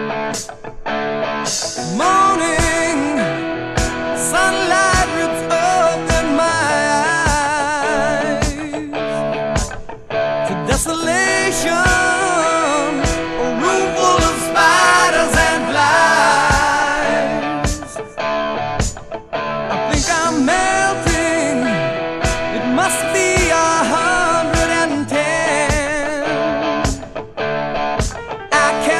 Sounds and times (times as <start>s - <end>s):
Music: 0.0s - 28.9s.